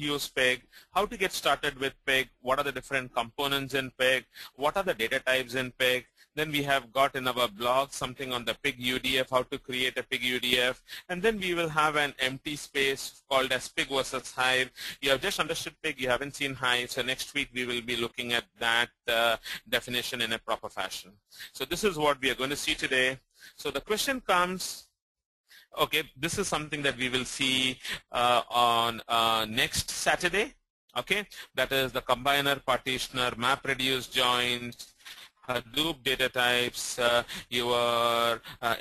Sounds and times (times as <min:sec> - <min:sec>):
Speech: 0:00.0 - 0:24.9, 0:25.7 - 0:38.8.